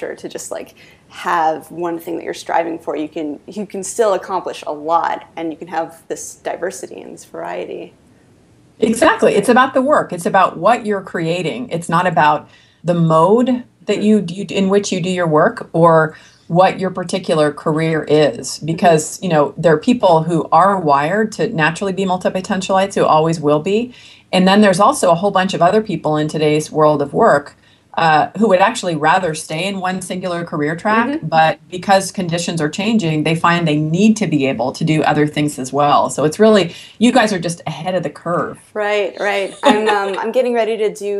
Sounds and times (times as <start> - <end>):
Conversation: 0.0 - 41.2.